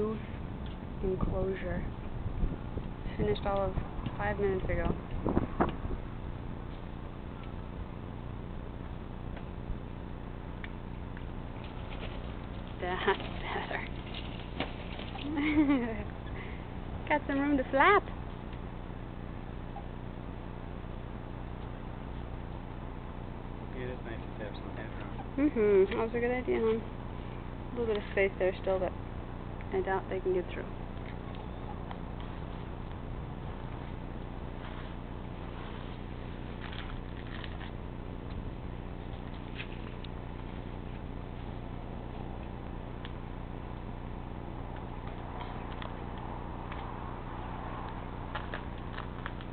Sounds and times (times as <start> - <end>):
Speech: 1.0 - 1.9, 3.1 - 5.0, 12.8 - 13.9, 17.1 - 18.1, 23.8 - 26.9, 29.7 - 30.8.